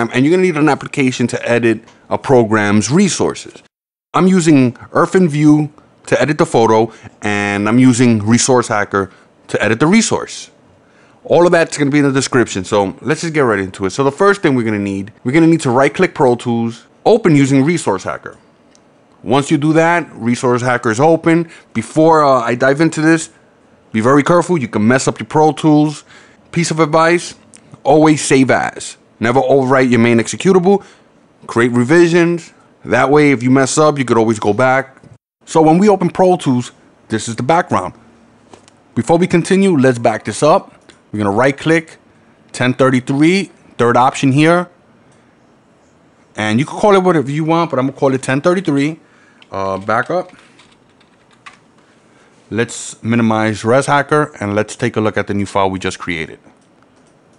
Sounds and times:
Speech: 0.0s - 10.6s, 11.2s - 18.4s, 19.2s - 38.0s, 39.0s - 44.8s, 46.4s - 50.4s, 52.5s - 56.5s.

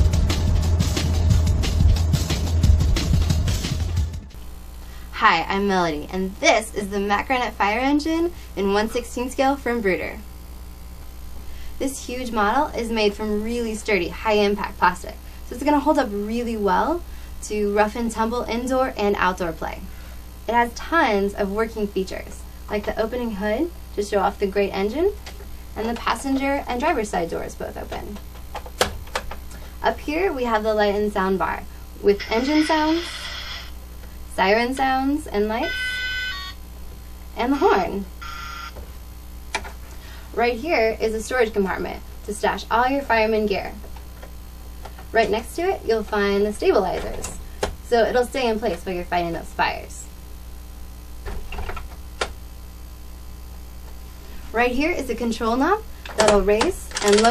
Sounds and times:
Car alarm: 35.6s - 36.6s.

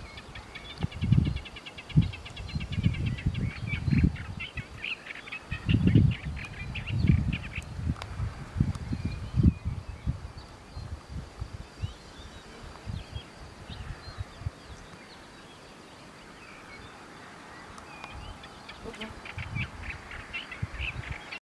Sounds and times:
Bird: 0.0s - 7.7s, 11.8s - 21.4s.

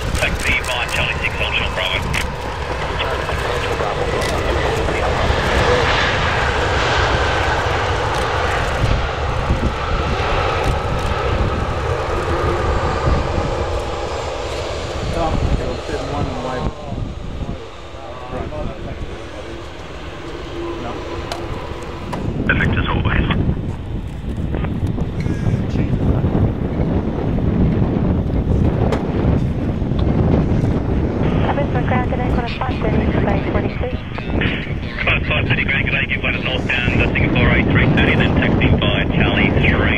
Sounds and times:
Aircraft: 0.0s - 39.9s
Outside, urban or manmade: 0.0s - 39.9s
Speech: 0.2s - 2.2s, 2.8s - 5.9s, 15.0s - 19.6s, 22.5s - 23.4s, 31.4s - 39.9s.

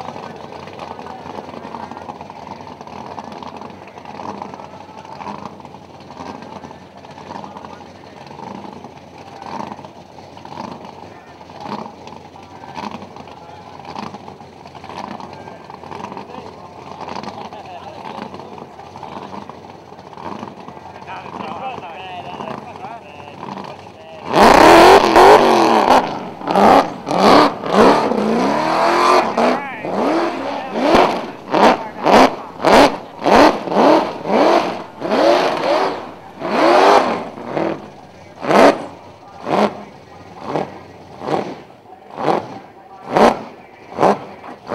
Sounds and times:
Race car, auto racing: 0.0s - 44.7s
Speech: 0.1s - 2.4s, 6.3s - 8.5s, 11.0s - 13.9s, 15.1s - 19.5s, 20.8s - 24.3s, 29.0s - 32.6s, 37.9s - 44.7s.

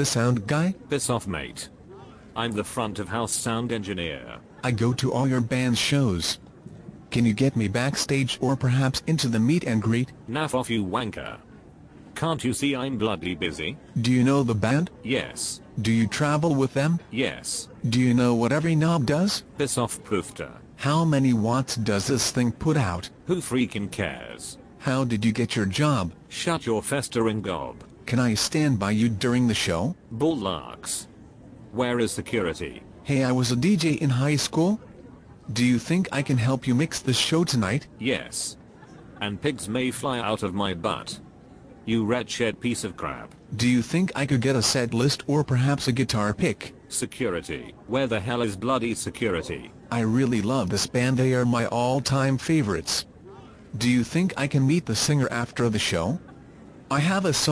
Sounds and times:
Speech: 0.0s - 56.3s, 56.9s - 57.5s.

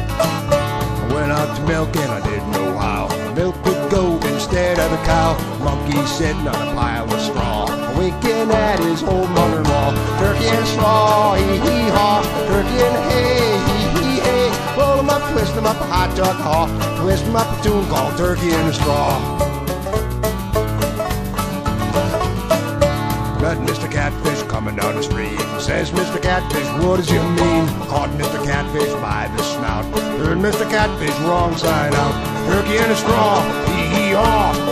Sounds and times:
Music: 0.0s - 34.7s.

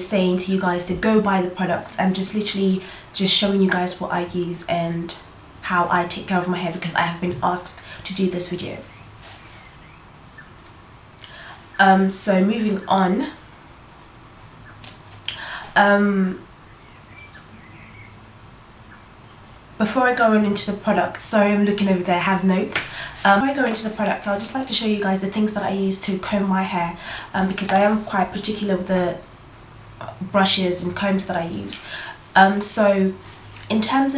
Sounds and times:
Speech: 0.0s - 8.9s, 11.8s - 13.4s, 15.8s - 16.4s, 19.8s - 29.2s, 30.0s - 34.1s.

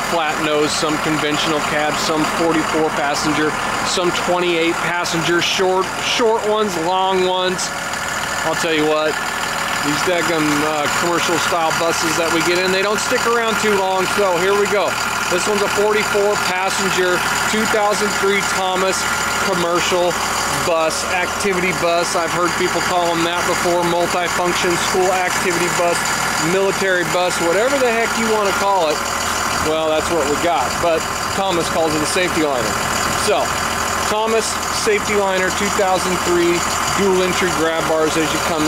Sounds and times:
Speech: 0.0s - 7.8s, 8.4s - 9.2s, 9.8s - 29.0s, 29.6s - 38.6s
Bus: 0.0s - 38.6s
Idling: 0.0s - 38.6s.

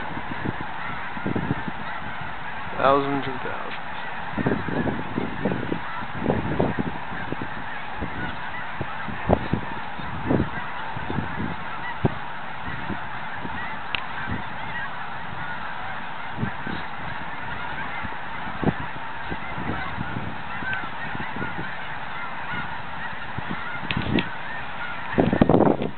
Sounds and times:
Bird: 0.0s - 25.9s
Duck: 0.0s - 25.9s.

